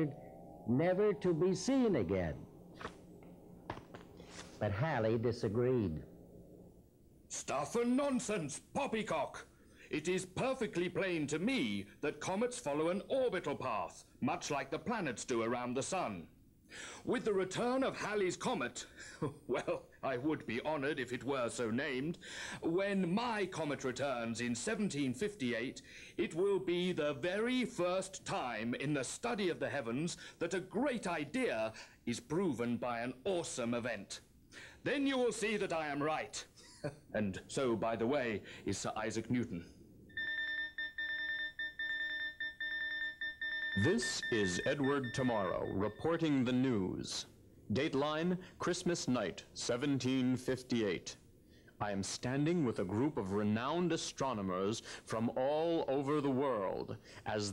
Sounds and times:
Speech: 0.0s - 2.4s, 4.6s - 6.1s, 7.3s - 16.3s, 17.0s - 39.7s, 43.8s - 51.2s, 51.8s - 57.5s
Alarm clock: 40.1s - 46.6s.

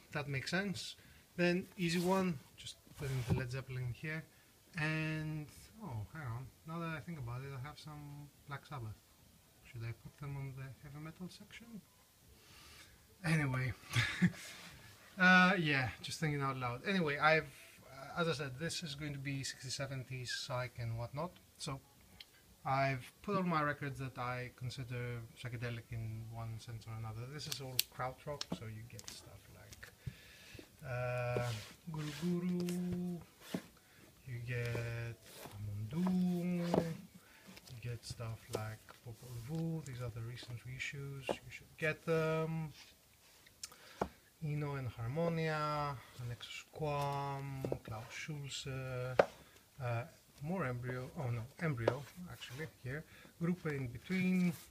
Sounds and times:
Speech: 0.0s - 9.0s, 9.6s - 11.9s, 13.2s - 13.8s, 15.2s - 21.8s, 22.6s - 29.9s, 30.8s - 33.3s, 34.2s - 37.1s, 37.7s - 42.8s, 44.4s - 54.7s
Inside, small room: 0.0s - 54.7s.

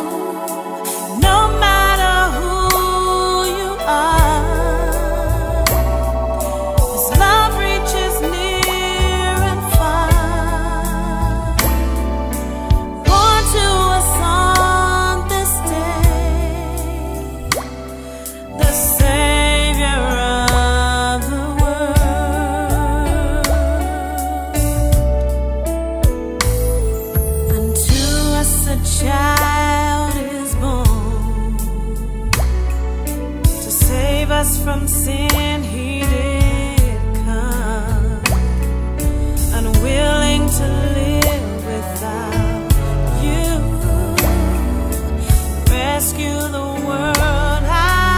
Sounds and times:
Christmas music: 0.0s - 48.1s.

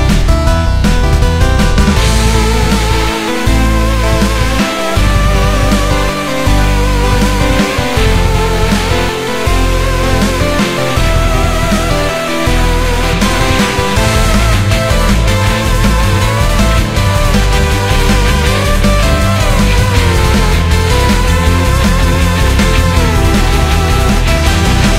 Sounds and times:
Music: 0.0s - 24.9s.

